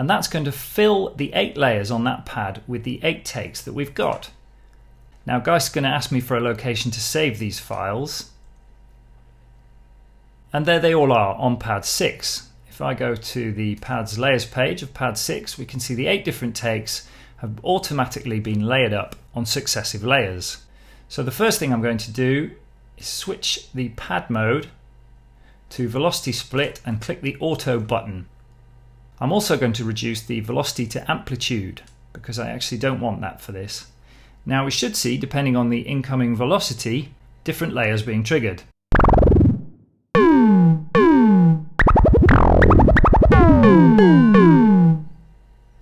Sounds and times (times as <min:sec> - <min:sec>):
Speech: 0:00.0 - 0:04.4, 0:05.2 - 0:08.4, 0:10.5 - 0:24.8, 0:25.7 - 0:28.3, 0:29.2 - 0:38.7
Sampler: 0:38.9 - 0:45.3.